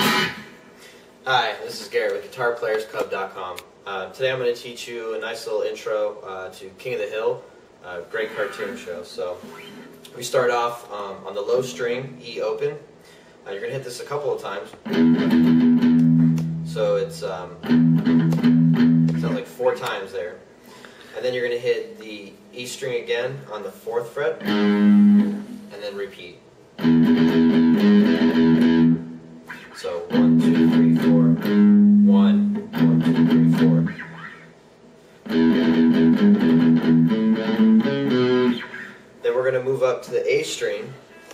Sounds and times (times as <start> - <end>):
Speech: 1.2 - 9.5, 10.1 - 14.9, 16.7 - 17.6, 19.2 - 20.5, 21.2 - 24.4, 25.7 - 26.5, 29.8 - 34.0, 39.2 - 41.1.